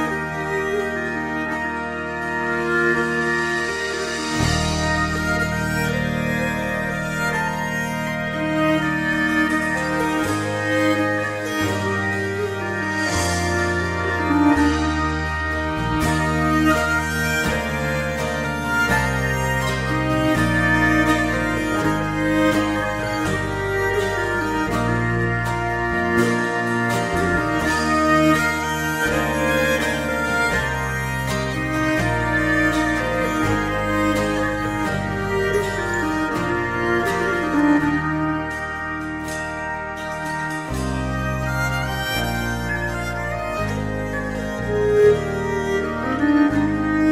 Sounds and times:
Music: 0:00.0 - 0:47.1.

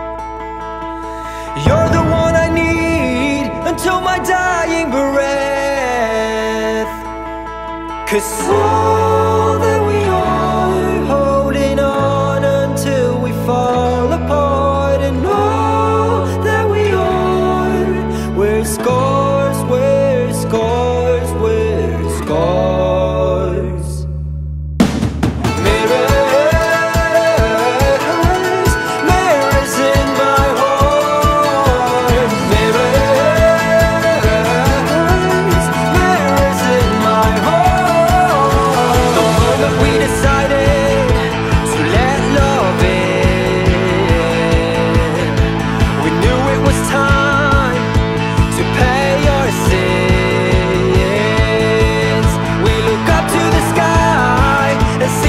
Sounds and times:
Tender music: 0:00.0 - 0:24.8, 0:25.4 - 0:55.2.

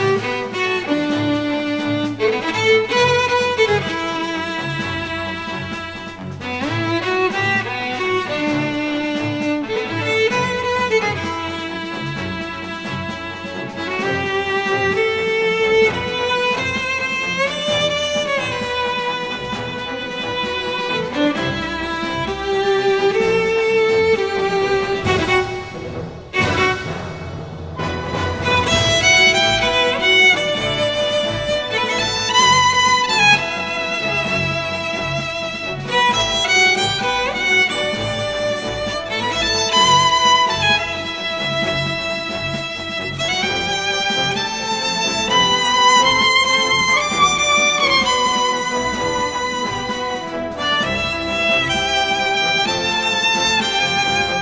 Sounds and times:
Violin, fiddle: 0:00.0 - 0:54.4.

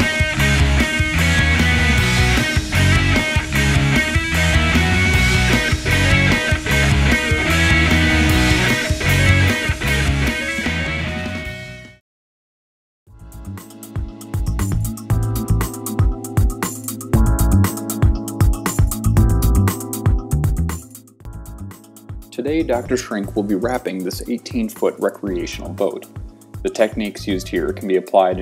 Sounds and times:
Music: 0:00.0 - 0:12.0, 0:13.1 - 0:28.4.

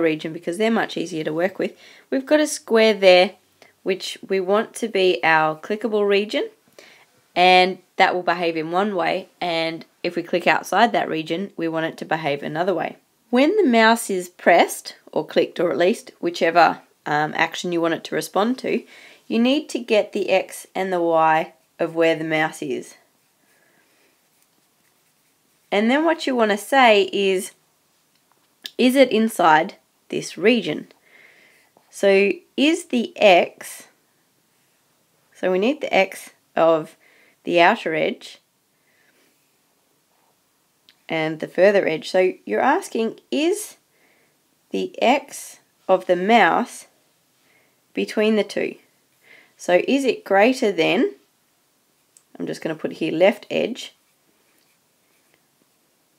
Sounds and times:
Speech: 0:00.0 - 0:06.6, 0:07.4 - 0:23.0, 0:25.7 - 0:27.6, 0:28.7 - 0:30.9, 0:31.9 - 0:33.9, 0:35.4 - 0:38.4, 0:41.1 - 0:43.8, 0:44.7 - 0:46.9, 0:48.0 - 0:48.8, 0:49.6 - 0:51.2, 0:52.3 - 0:54.0.

